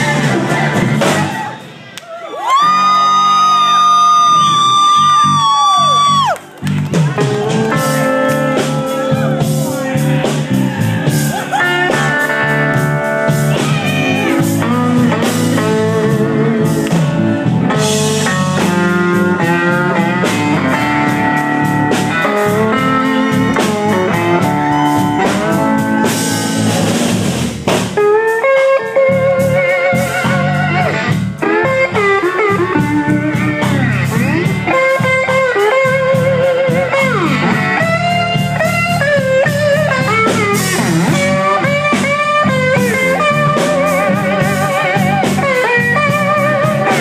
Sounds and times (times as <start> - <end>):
Bass guitar: 0.0 - 47.0
Blues: 0.0 - 47.0.